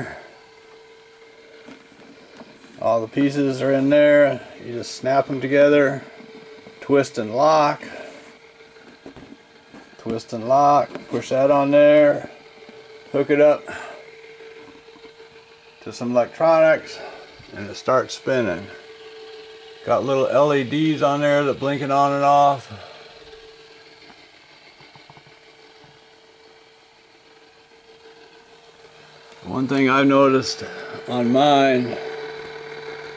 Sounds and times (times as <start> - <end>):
Speech: 2.8 - 6.1, 6.8 - 8.0, 10.0 - 12.4, 13.1 - 13.7, 15.8 - 18.8, 19.8 - 22.9, 29.4 - 32.0.